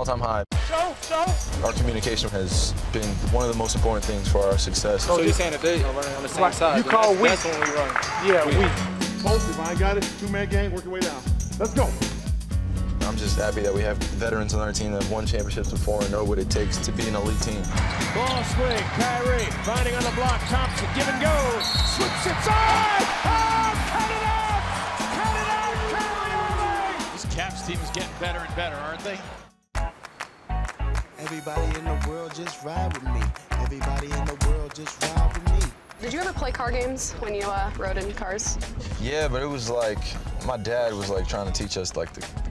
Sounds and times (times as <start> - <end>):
Music: 0.0 - 42.5
Speech: 13.0 - 21.5.